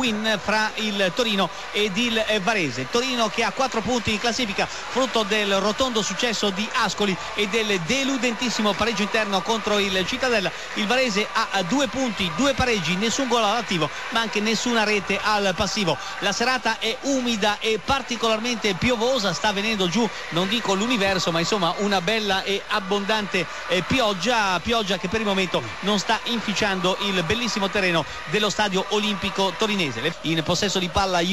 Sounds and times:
Speech: 0.0s - 31.3s.

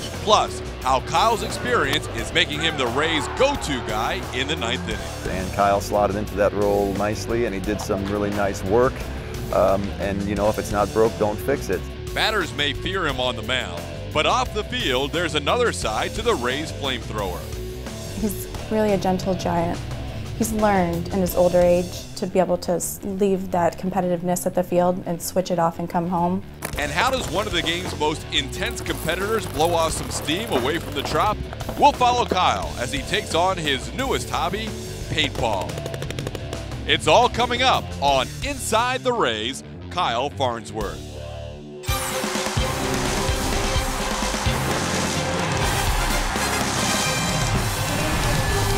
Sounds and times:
Music: 0.0s - 48.7s
Speech: 0.1s - 17.4s, 20.4s - 35.7s, 36.9s - 41.0s.

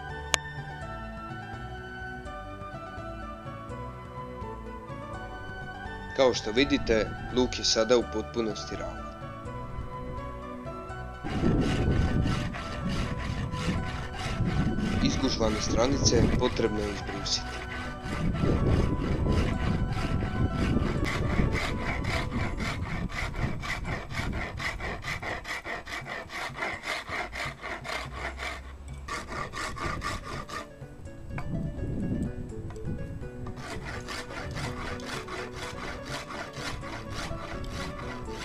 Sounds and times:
Filing (rasp): 6.2s - 9.0s, 11.2s - 30.7s, 33.5s - 38.4s
Wood: 11.2s - 30.7s, 33.5s - 38.4s
Rub: 11.3s - 30.6s.

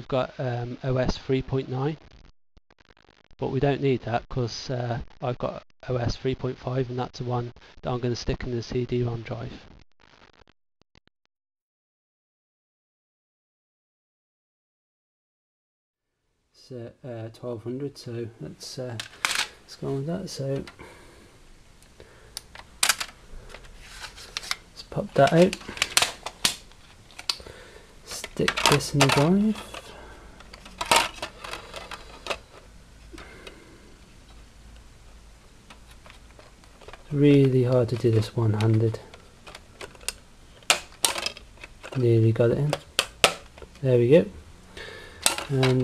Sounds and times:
Speech: 0.0s - 2.0s, 3.4s - 9.6s, 16.6s - 19.0s, 19.7s - 20.7s, 24.8s - 25.6s, 28.1s - 29.8s, 37.1s - 39.1s, 41.9s - 42.8s, 43.8s - 44.4s, 45.5s - 45.8s.

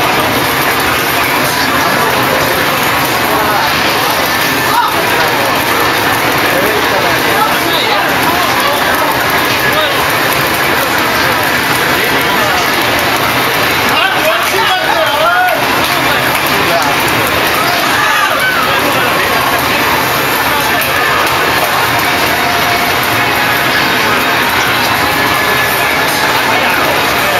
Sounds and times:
Speech: 0.0s - 27.3s.

